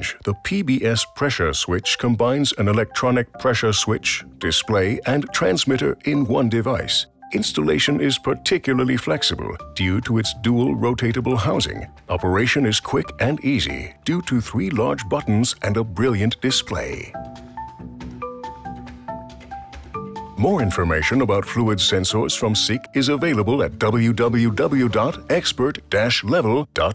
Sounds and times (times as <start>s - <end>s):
Speech: 0.0s - 17.2s, 20.4s - 26.9s.